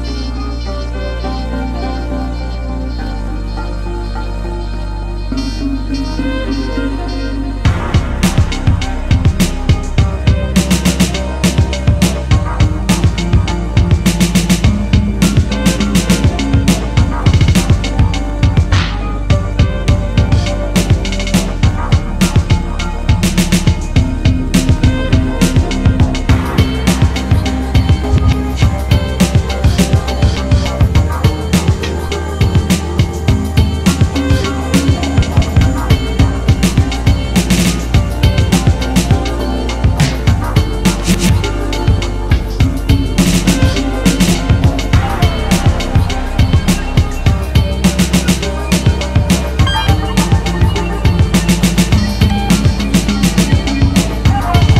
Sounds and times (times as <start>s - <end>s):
Music: 0.0s - 54.7s.